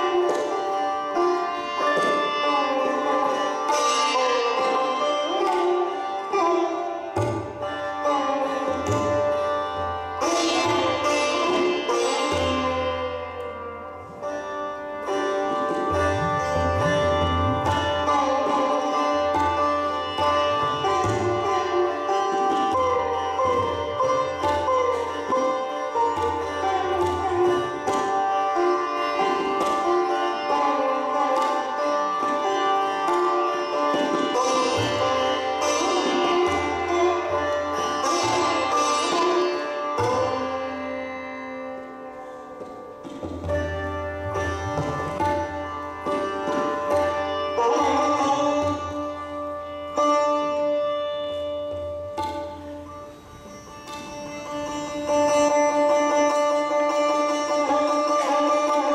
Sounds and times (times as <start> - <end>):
Sitar: 0.0 - 58.9.